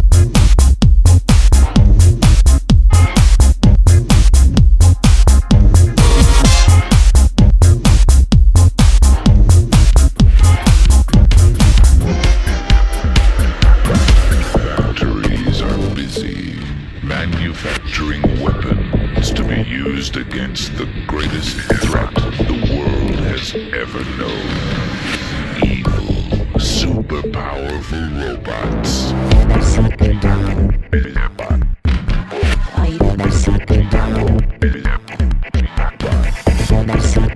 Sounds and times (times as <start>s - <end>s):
Trance music: 0.0s - 31.6s, 32.3s - 37.3s
House music: 0.0s - 37.3s
Techno: 0.0s - 37.3s.